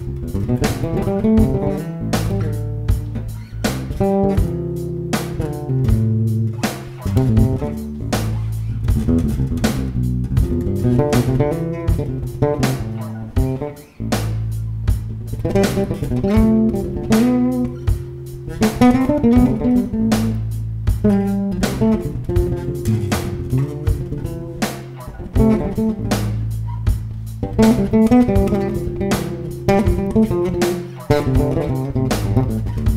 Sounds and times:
Bass guitar: 0:00.0 - 0:32.9
Blues: 0:00.0 - 0:32.9
Jazz: 0:00.0 - 0:32.9.

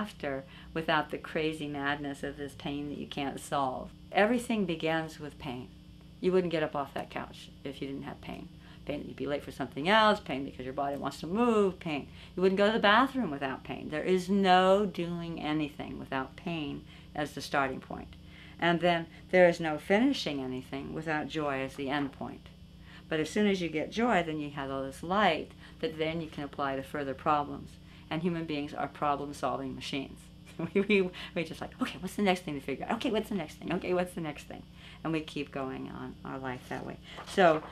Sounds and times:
Speech: 0:00.0 - 0:22.5, 0:23.1 - 0:37.7.

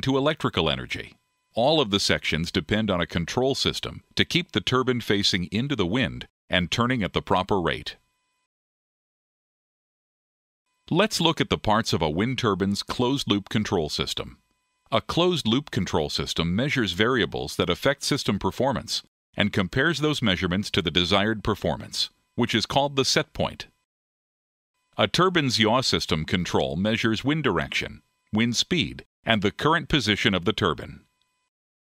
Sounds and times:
Speech: 0:00.0 - 0:08.0, 0:10.9 - 0:23.8, 0:25.0 - 0:31.1.

